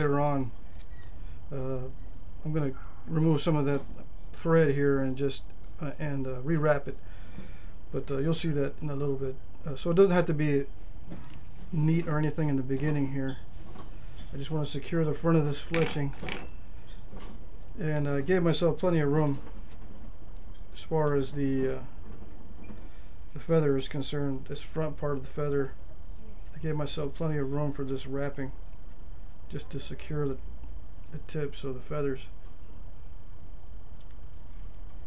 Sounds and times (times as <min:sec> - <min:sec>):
Speech: 0:00.0 - 0:00.6, 0:01.5 - 0:07.0, 0:07.9 - 0:10.7, 0:11.7 - 0:13.4, 0:14.3 - 0:16.3, 0:17.8 - 0:19.5, 0:20.8 - 0:21.9, 0:23.4 - 0:25.8, 0:26.6 - 0:28.6, 0:29.5 - 0:30.4, 0:31.1 - 0:32.4.